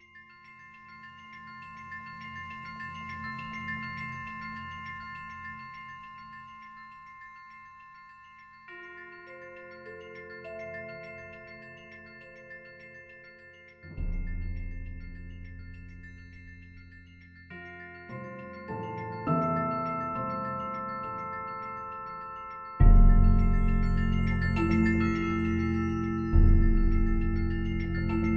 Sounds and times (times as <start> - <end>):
Marimba, xylophone: 0.0 - 28.3.